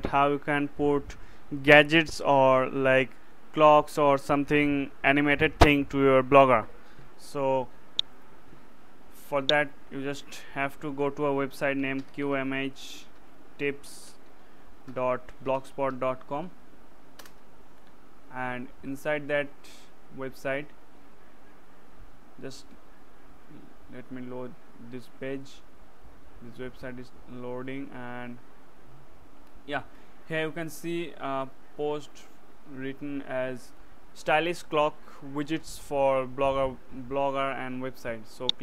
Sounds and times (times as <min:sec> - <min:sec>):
Speech: 0:00.0 - 0:07.7, 0:09.2 - 0:14.2, 0:14.9 - 0:16.6, 0:18.3 - 0:20.7, 0:22.4 - 0:22.8, 0:23.5 - 0:25.6, 0:26.4 - 0:28.4, 0:29.7 - 0:38.6.